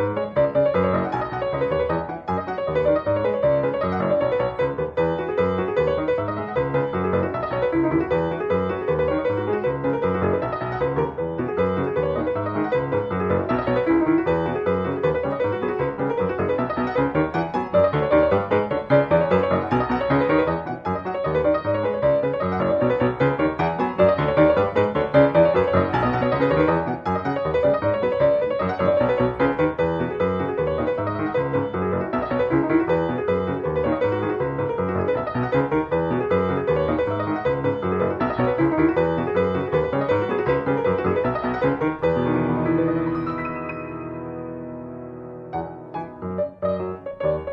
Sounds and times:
Music: 0:00.0 - 0:47.5.

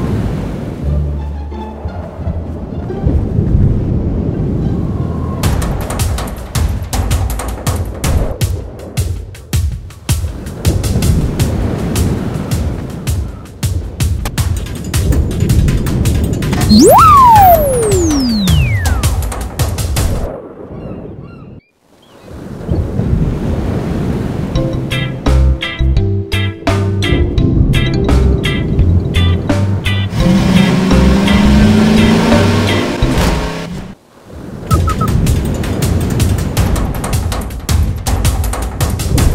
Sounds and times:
Music: 0:00.7 - 0:20.3, 0:24.6 - 0:33.7, 0:34.7 - 0:39.3.

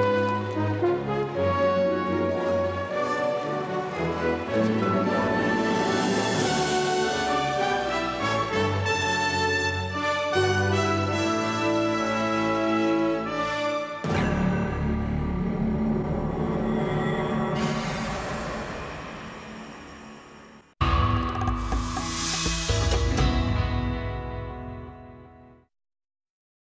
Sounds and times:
Music: 0:00.0 - 0:25.7.

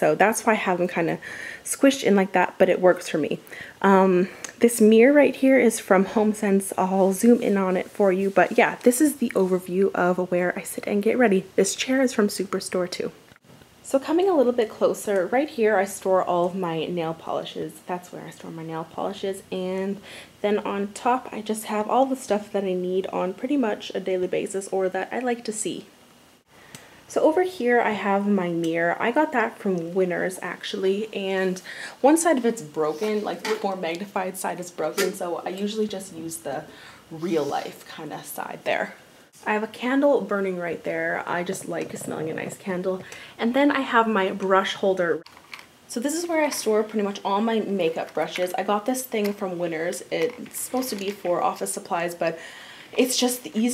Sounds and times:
Speech: 0:00.0 - 0:13.2, 0:13.8 - 0:25.9, 0:27.1 - 0:45.2, 0:45.9 - 0:53.7.

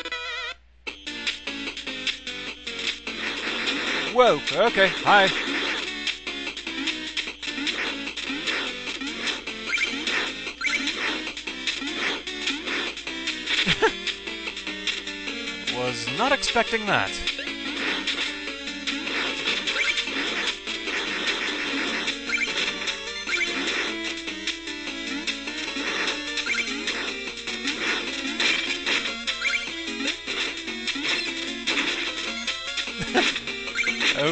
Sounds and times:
Music: 0:00.0 - 0:34.3
Speech: 0:04.1 - 0:05.4, 0:15.7 - 0:17.3.

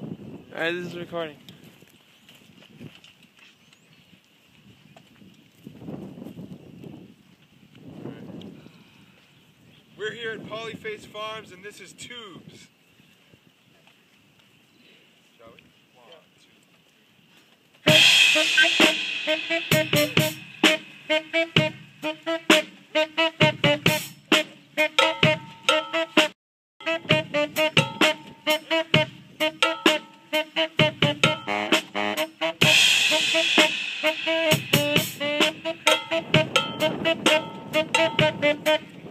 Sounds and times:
Music: 0:17.9 - 0:39.1.

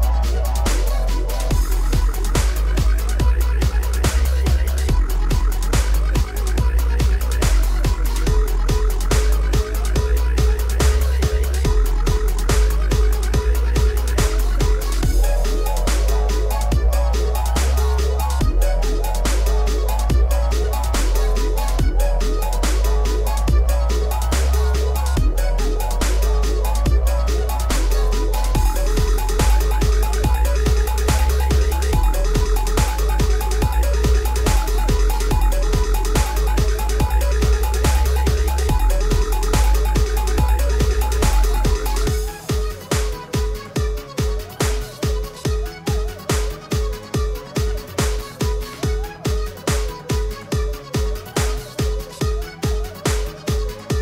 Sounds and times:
Electronic music: 0:00.0 - 0:54.0.

